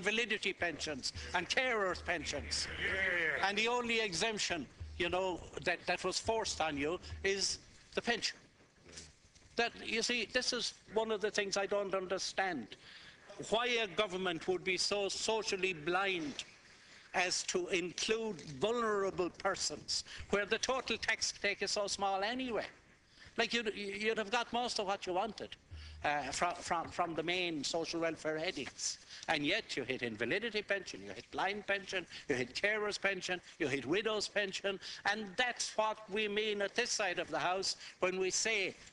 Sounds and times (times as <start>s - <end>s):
Male speech, man speaking: 0.0s - 8.5s, 9.6s - 16.5s, 17.2s - 22.8s, 23.4s - 38.8s.